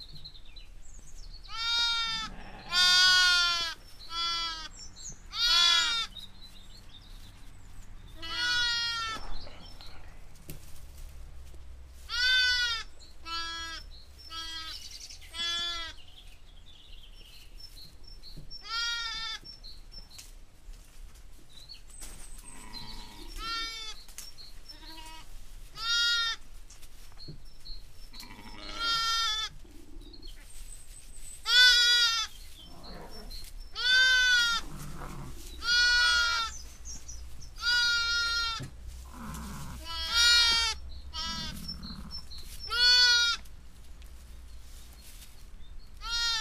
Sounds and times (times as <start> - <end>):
Bleat: 1.5 - 4.7, 5.3 - 6.1, 8.2 - 9.2, 12.1 - 16.0, 18.6 - 19.4, 22.4 - 24.0, 24.7 - 26.4, 28.2 - 29.6, 31.4 - 32.3, 33.8 - 36.6, 37.6 - 43.5, 46.0 - 46.4.